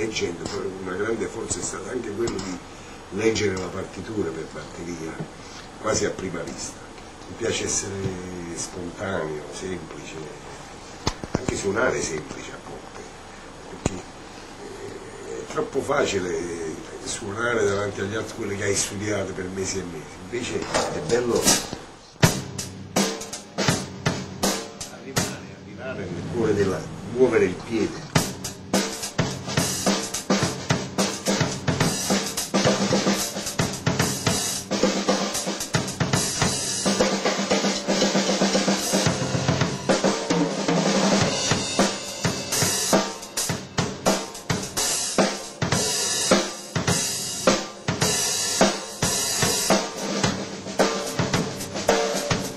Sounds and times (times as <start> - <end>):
Drum kit: 0.0 - 10.2, 20.4 - 52.5
Bass drum: 20.8 - 25.5, 28.0 - 40.2, 41.0 - 44.8
Snare drum: 28.2 - 52.5.